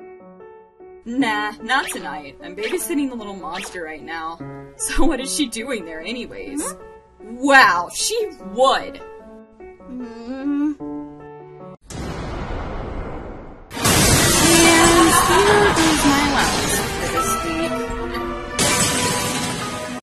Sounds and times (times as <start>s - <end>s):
Music: 0.0s - 11.8s, 13.8s - 20.0s
Speech: 1.1s - 9.0s, 14.4s - 18.0s.